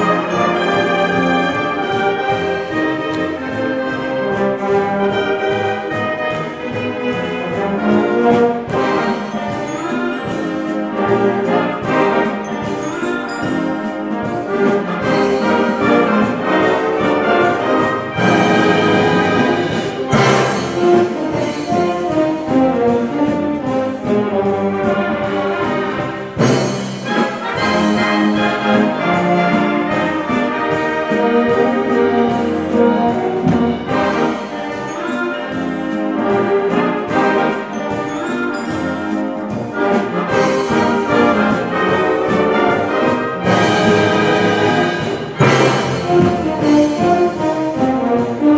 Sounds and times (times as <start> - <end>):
Music: 0.0 - 48.5.